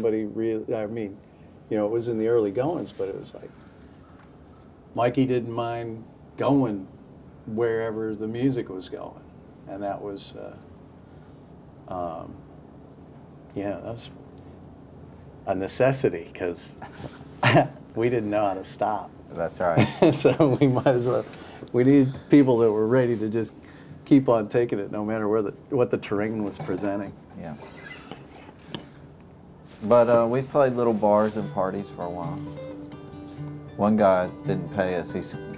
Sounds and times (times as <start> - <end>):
Speech: 0.0 - 3.5, 5.0 - 6.9, 7.5 - 10.6, 11.9 - 12.4, 13.5 - 14.2, 15.5 - 16.8, 18.0 - 27.6, 29.8 - 32.4, 33.8 - 35.5.